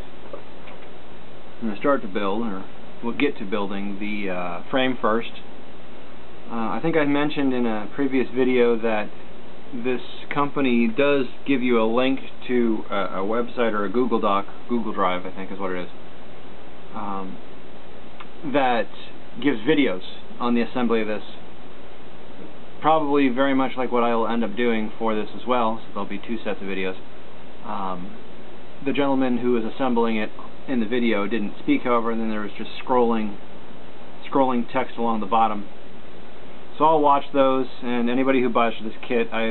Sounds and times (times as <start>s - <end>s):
Speech: 1.6s - 5.5s, 6.5s - 16.0s, 16.9s - 17.4s, 18.4s - 21.5s, 22.8s - 33.4s, 34.2s - 35.8s, 36.7s - 39.5s.